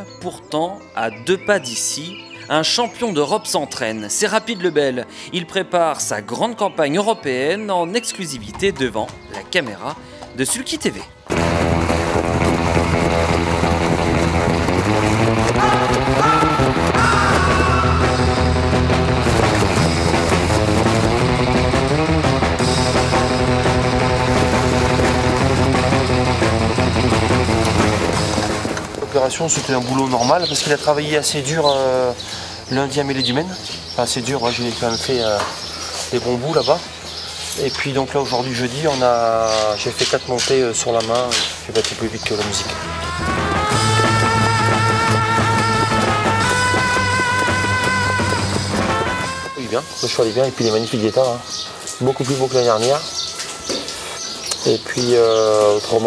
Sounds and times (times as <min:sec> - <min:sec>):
Music: 0:00.0 - 0:56.0.